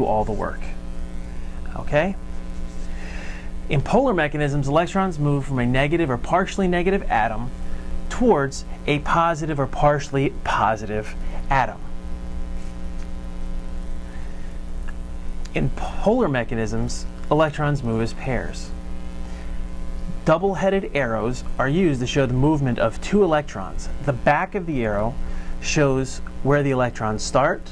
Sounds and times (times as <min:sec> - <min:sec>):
Speech: 0:00.0 - 0:00.8, 0:01.7 - 0:02.2, 0:03.7 - 0:07.5, 0:08.1 - 0:11.9, 0:15.5 - 0:18.7, 0:20.2 - 0:27.7.